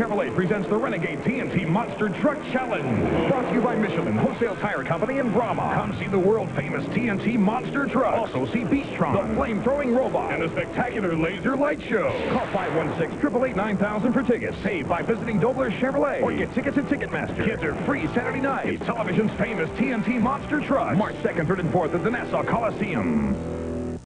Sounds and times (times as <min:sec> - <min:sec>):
Speech: 0:00.0 - 0:23.4
Music: 0:00.0 - 0:24.0.